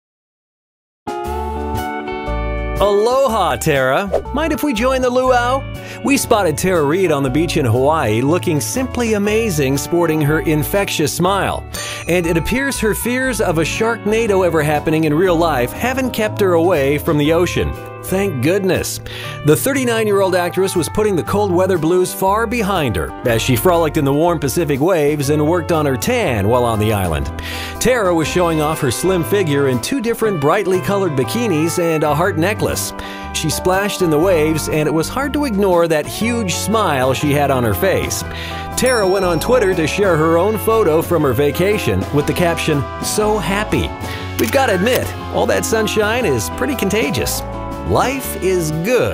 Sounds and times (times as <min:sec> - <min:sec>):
Music: 0:01.1 - 0:49.1
Speech: 0:02.8 - 0:49.1.